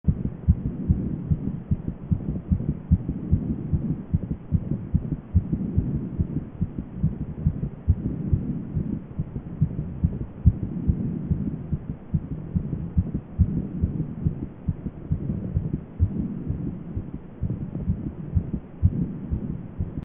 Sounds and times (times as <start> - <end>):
Heart murmur: 0.1 - 20.0.